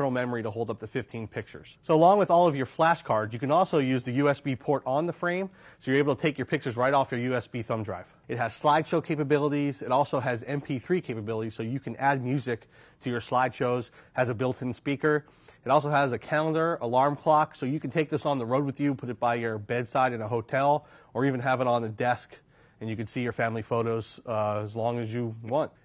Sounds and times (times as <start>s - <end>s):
Speech: 0.0s - 25.8s.